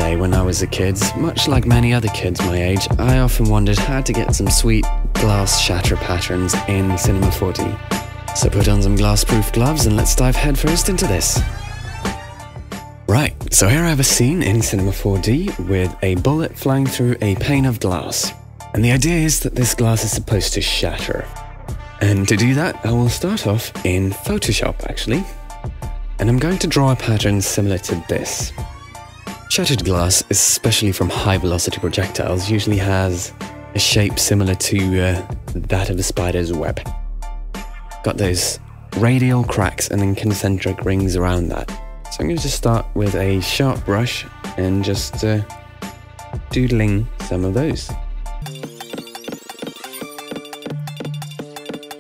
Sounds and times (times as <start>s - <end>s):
Speech: 0.0s - 7.8s, 8.4s - 11.4s, 13.1s - 21.4s, 22.0s - 25.4s, 26.2s - 28.6s, 29.5s - 36.9s, 38.0s - 45.6s, 46.6s - 48.0s
Music: 0.0s - 52.0s.